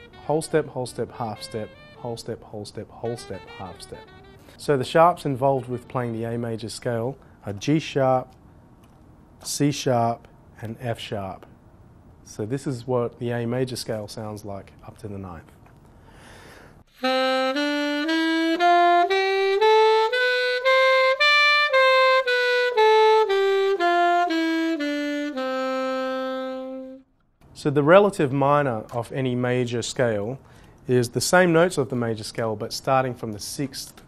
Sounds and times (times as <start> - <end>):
Jazz: 0.0 - 6.5, 16.9 - 27.1
Saxophone: 0.0 - 6.5, 16.9 - 27.1
Speech: 0.2 - 8.4, 9.4 - 11.5, 12.3 - 15.6, 27.6 - 34.0.